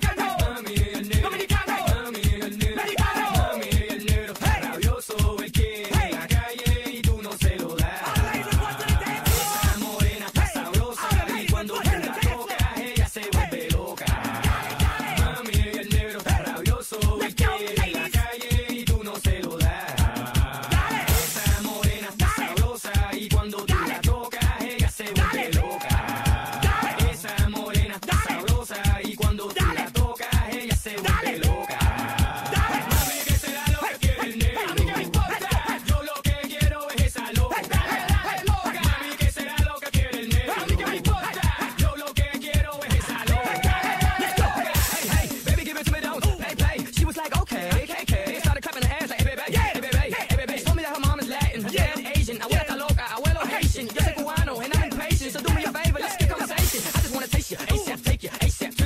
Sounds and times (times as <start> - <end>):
Techno: 0.0 - 58.8.